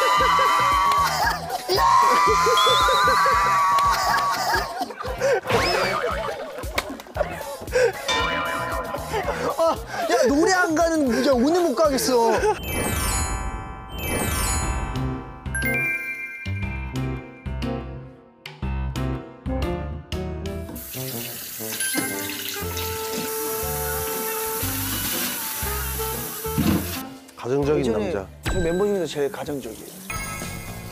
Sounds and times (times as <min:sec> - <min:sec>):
Music: 0:00.0 - 0:30.9.